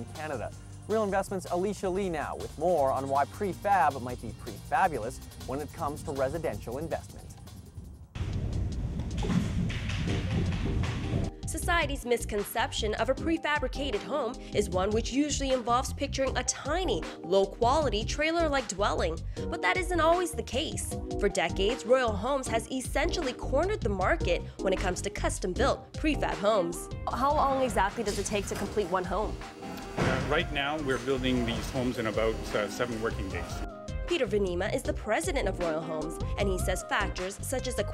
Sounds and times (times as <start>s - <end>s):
Music: 0.0s - 37.9s.